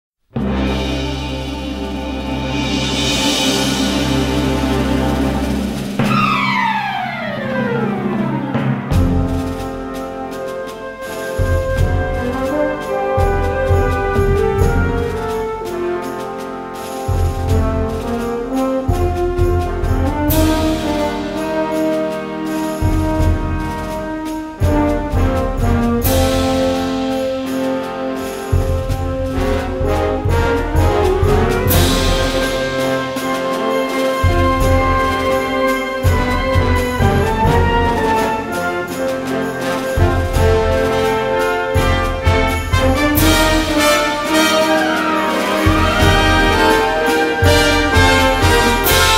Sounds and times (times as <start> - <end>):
Timpani: 0.3 - 49.1.